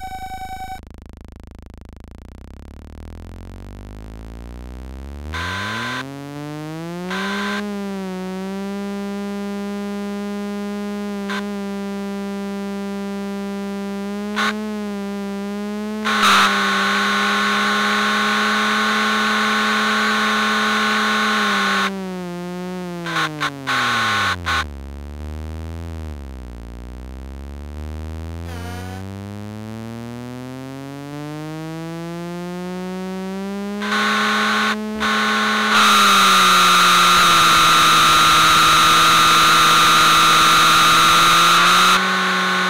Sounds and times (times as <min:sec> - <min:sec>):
Sound effect: 0:00.0 - 0:00.9, 0:27.6 - 0:30.4.